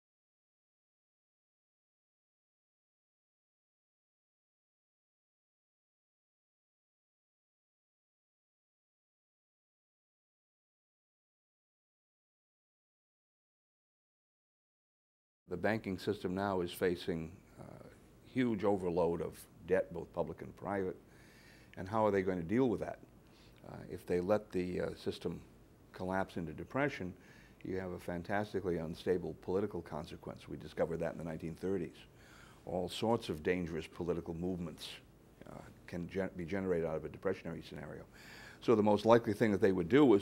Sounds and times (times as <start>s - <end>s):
Speech: 15.5s - 21.0s, 21.8s - 23.0s, 23.6s - 32.1s, 32.7s - 40.2s.